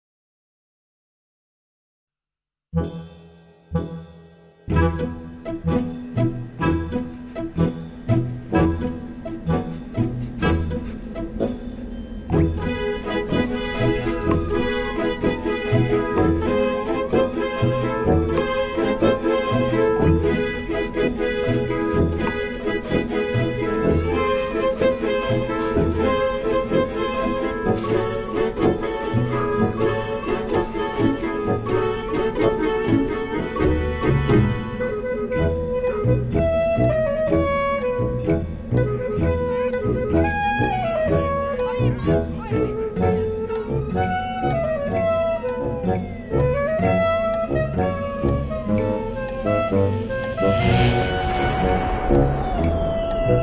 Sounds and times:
Music: 0:02.7 - 0:53.4.

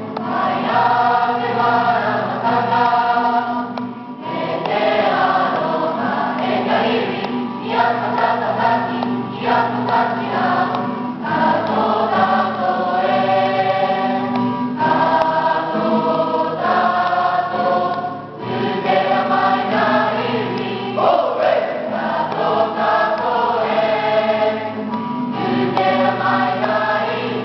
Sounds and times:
Choir: 0:00.0 - 0:27.4.

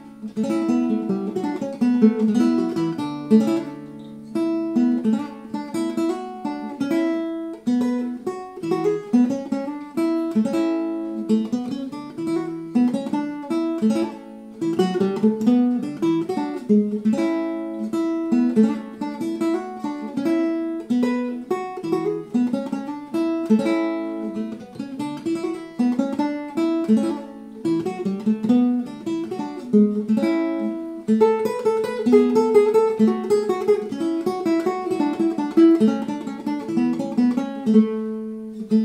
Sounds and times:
Acoustic guitar: 0:00.0 - 0:38.8
Strum: 0:00.0 - 0:38.8.

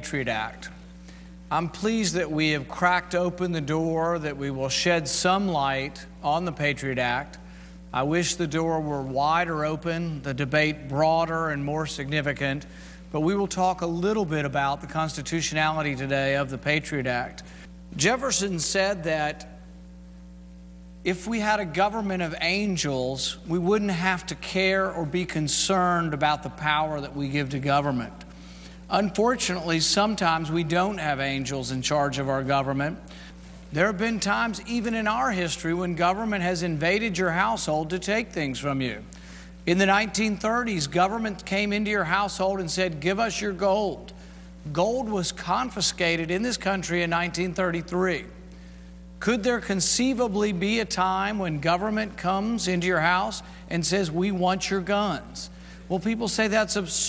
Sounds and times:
Male speech, man speaking: 0:00.0 - 0:00.8, 0:01.5 - 0:17.4, 0:18.0 - 0:19.6, 0:21.1 - 0:28.2, 0:28.9 - 0:33.0, 0:33.7 - 0:39.1, 0:39.7 - 0:44.1, 0:44.7 - 0:48.3, 0:49.2 - 0:57.0.

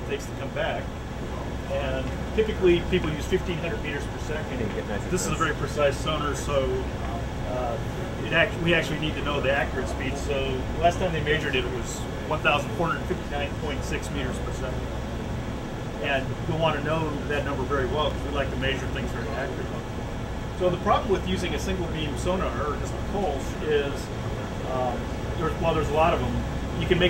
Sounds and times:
Speech: 0:00.0 - 0:14.9, 0:16.0 - 0:19.9, 0:20.6 - 0:27.1.

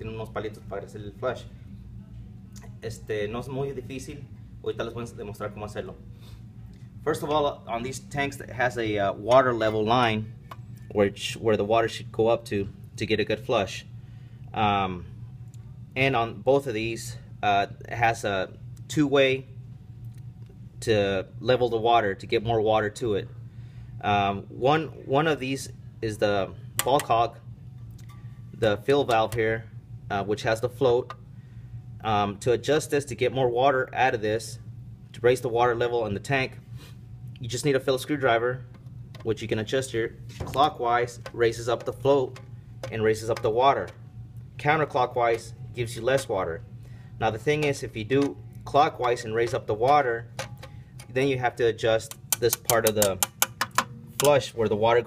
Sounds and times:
Speech: 0:00.0 - 0:01.5, 0:02.6 - 0:06.0, 0:07.0 - 0:10.3, 0:10.9 - 0:13.9, 0:14.6 - 0:15.1, 0:16.0 - 0:19.5, 0:20.8 - 0:23.3, 0:24.0 - 0:27.4, 0:28.6 - 0:31.1, 0:32.0 - 0:34.6, 0:35.2 - 0:36.6, 0:37.4 - 0:44.0, 0:44.6 - 0:46.6, 0:47.2 - 0:50.3, 0:51.1 - 0:53.2, 0:54.2 - 0:55.0.

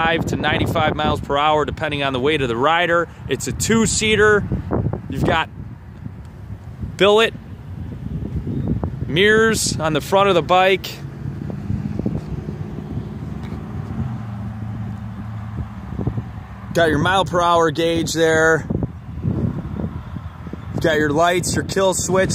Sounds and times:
Speech: 0:00.0 - 0:04.4, 0:05.1 - 0:05.5, 0:07.0 - 0:07.4, 0:09.1 - 0:11.0, 0:16.7 - 0:18.7, 0:20.8 - 0:22.3
Vehicle: 0:00.0 - 0:22.3.

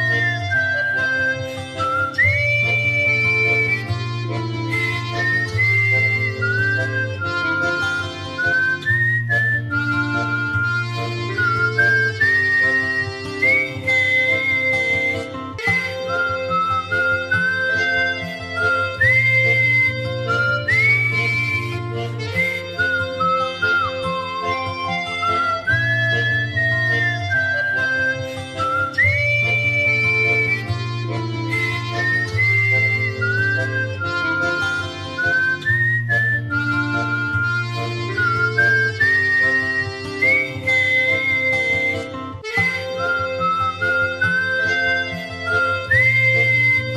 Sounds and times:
Music: 0:00.0 - 0:46.9
Whistling: 0:00.0 - 0:46.9.

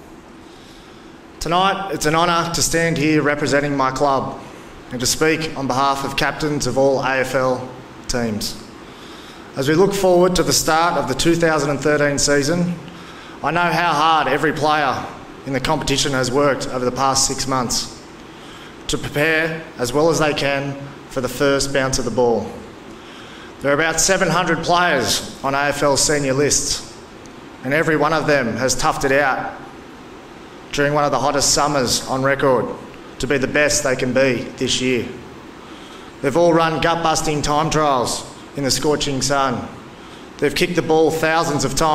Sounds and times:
Narration, monologue: 0:00.0 - 0:41.9
Male speech, man speaking: 0:01.4 - 0:08.7, 0:09.6 - 0:12.8, 0:13.4 - 0:18.0, 0:18.9 - 0:22.7, 0:23.6 - 0:26.9, 0:27.6 - 0:29.6, 0:30.7 - 0:35.2, 0:36.2 - 0:39.8, 0:40.4 - 0:41.9.

